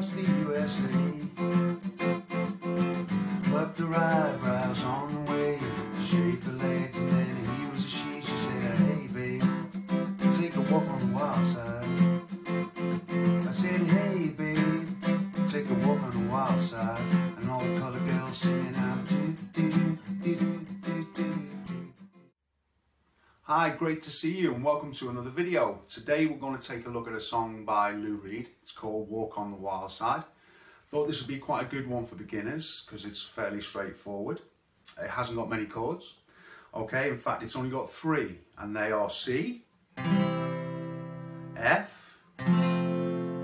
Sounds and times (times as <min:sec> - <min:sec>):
Guitar: 0:00.0 - 0:22.3, 0:39.9 - 0:43.4
Speech: 0:23.5 - 0:30.3, 0:30.9 - 0:39.7, 0:41.6 - 0:42.2.